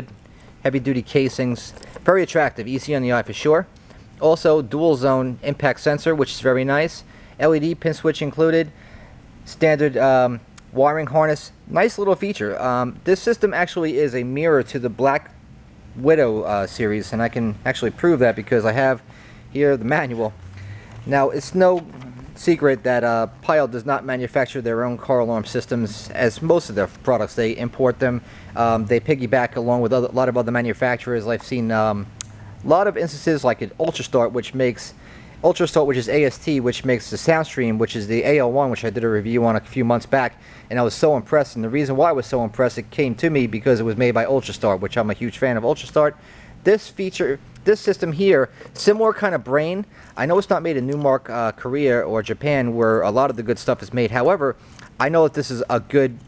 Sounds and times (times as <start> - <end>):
Speech: 0.0 - 8.7, 9.5 - 15.4, 16.0 - 20.4, 21.0 - 56.2.